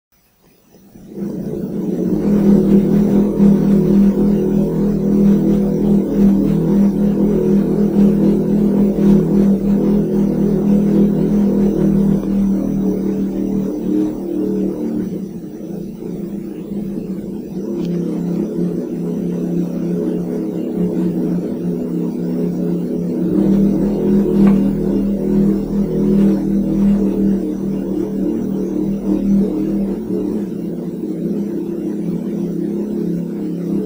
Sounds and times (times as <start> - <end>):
Noise: 0.1 - 33.8.